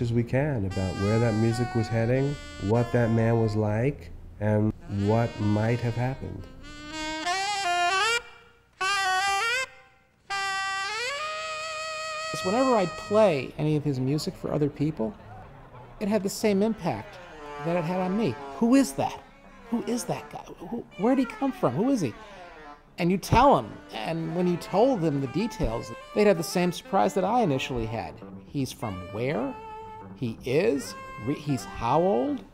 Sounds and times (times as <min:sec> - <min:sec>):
Music: 0:00.0 - 0:03.8, 0:04.7 - 0:32.5
Speech: 0:00.0 - 0:06.4, 0:12.4 - 0:15.4, 0:16.0 - 0:22.2, 0:23.0 - 0:29.6, 0:30.2 - 0:32.5.